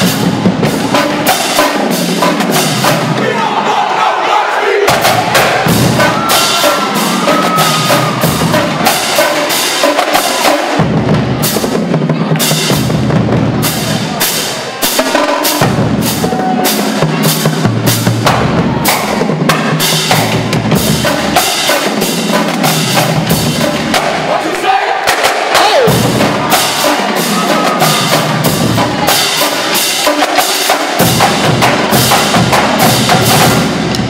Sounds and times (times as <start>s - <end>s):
Percussion: 0.0s - 3.2s, 4.9s - 34.1s.